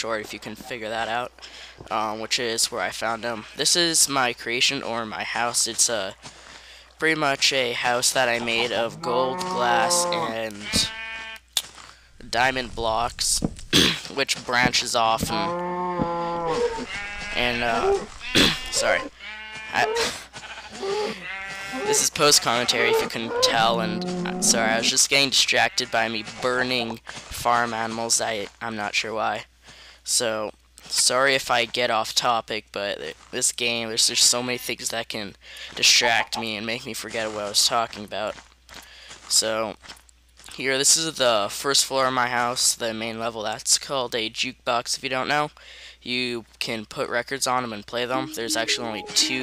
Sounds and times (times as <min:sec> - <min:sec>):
Speech: 0:00.0 - 0:06.2, 0:07.0 - 0:10.9, 0:12.2 - 0:15.5, 0:17.4 - 0:19.1, 0:19.8 - 0:20.2, 0:20.8 - 0:38.4, 0:39.3 - 0:39.8, 0:40.5 - 0:49.4.